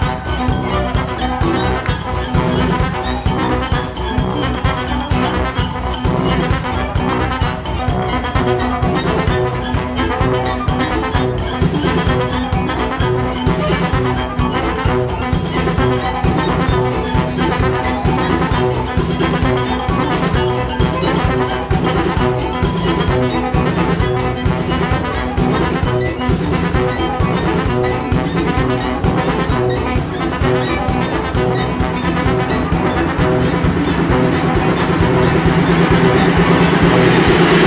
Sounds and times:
Orchestra: 0:00.0 - 0:37.6.

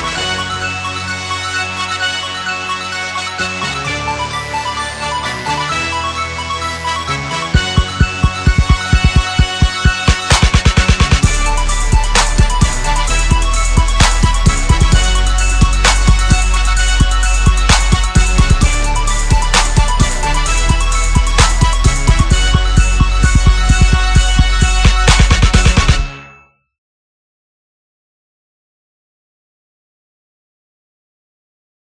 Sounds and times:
Hip hop music: 0:00.0 - 0:26.3.

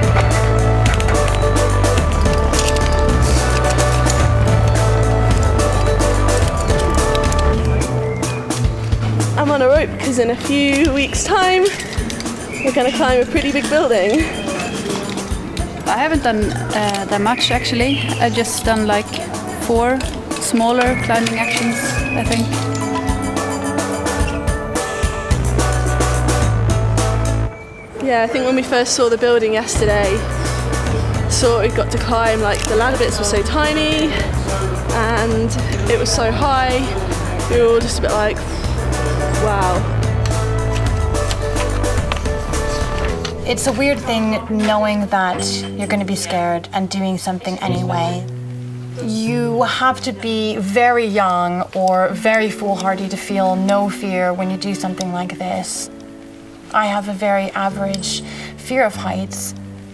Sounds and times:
Music: 0:00.0 - 0:59.9.

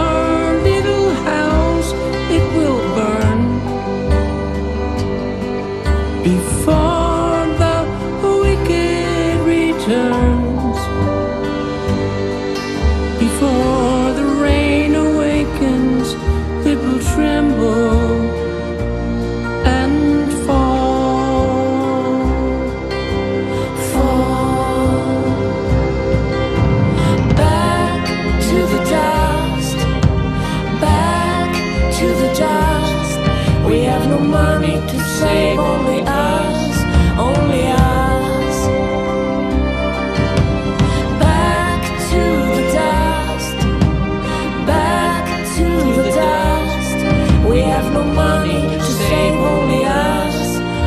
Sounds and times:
Sad music: 0:00.0 - 0:50.8.

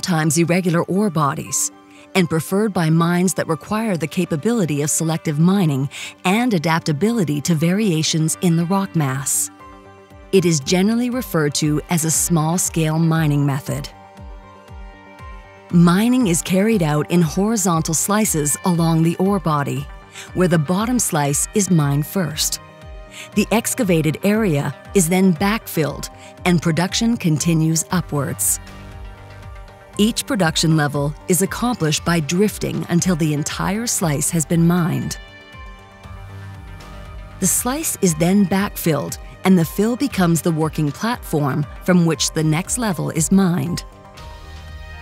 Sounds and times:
Speech: 0:00.0 - 0:09.5, 0:10.4 - 0:13.9, 0:15.8 - 0:22.6, 0:23.2 - 0:28.6, 0:30.0 - 0:35.2, 0:37.4 - 0:43.8
Music: 0:00.0 - 0:45.0.

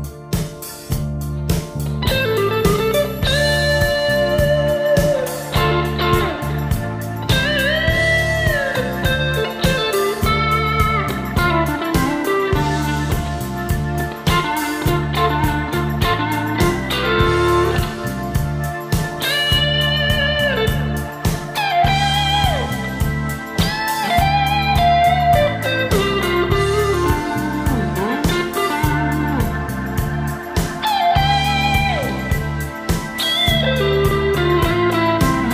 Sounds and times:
Guitar: 0:00.0 - 0:35.5
Rock music: 0:00.0 - 0:35.5.

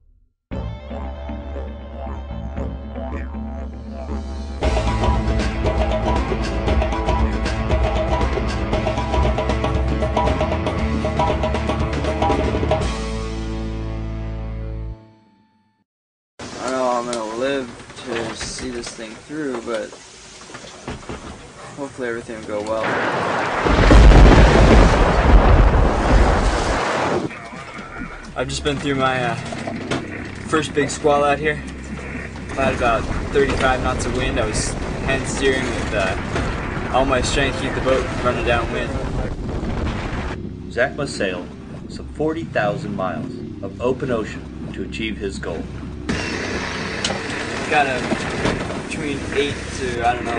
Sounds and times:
Boat, Water vehicle: 0:04.6 - 0:13.0, 0:16.4 - 0:50.3
Speech: 0:16.6 - 0:19.9, 0:21.8 - 0:22.9, 0:28.4 - 0:29.4, 0:30.5 - 0:31.6, 0:32.6 - 0:36.2, 0:36.9 - 0:39.3, 0:40.7 - 0:45.7, 0:47.7 - 0:48.1, 0:48.9 - 0:50.3.

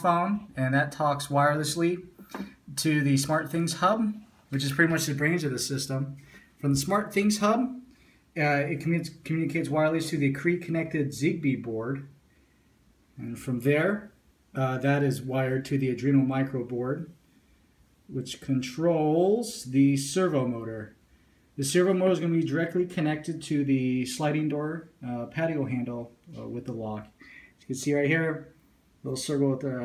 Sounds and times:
Speech: 0:00.0 - 0:12.1, 0:13.2 - 0:17.2, 0:18.1 - 0:21.0, 0:21.6 - 0:29.8.

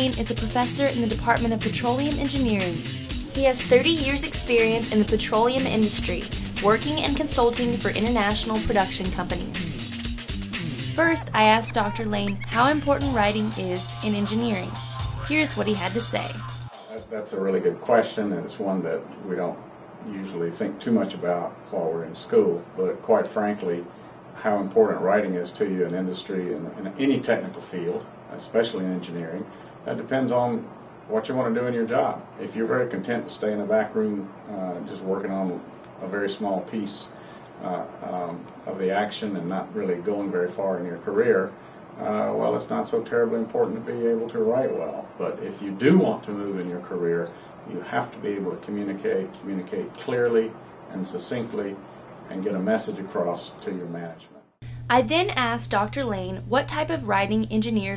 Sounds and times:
Speech: 0:00.0 - 0:02.8, 0:03.4 - 0:09.8, 0:11.0 - 0:57.9.

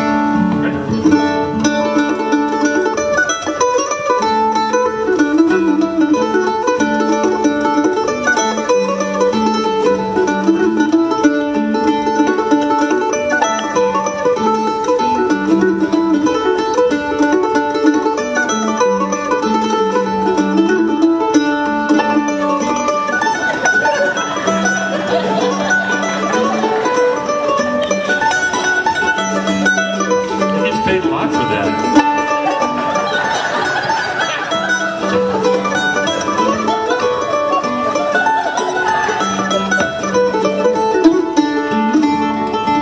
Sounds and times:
Violin, fiddle: 0:00.0 - 0:42.8.

